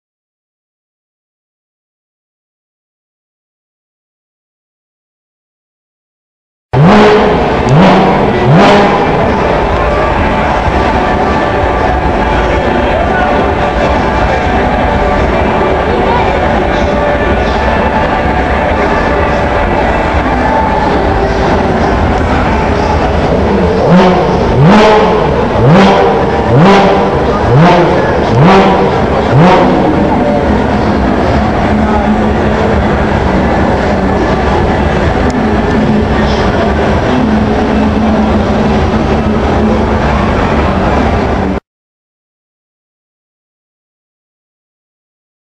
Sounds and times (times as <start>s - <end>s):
Car: 6.7s - 41.6s
Accelerating, revving, vroom: 6.8s - 10.0s, 23.1s - 33.2s
Speech: 7.3s - 41.6s.